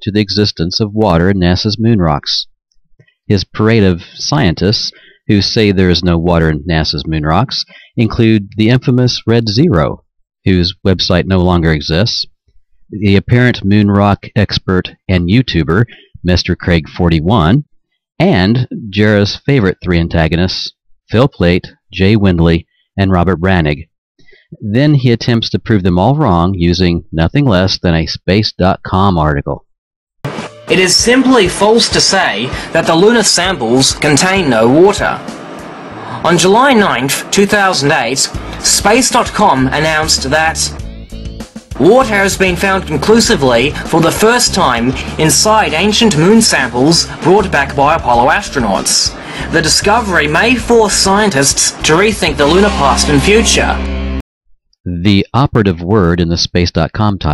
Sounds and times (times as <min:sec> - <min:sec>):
Speech: 0:00.0 - 0:02.5, 0:03.3 - 0:12.3, 0:12.9 - 0:17.6, 0:18.2 - 0:29.7, 0:30.7 - 0:35.3, 0:36.1 - 0:40.8, 0:41.8 - 0:53.9, 0:54.9 - 0:57.3.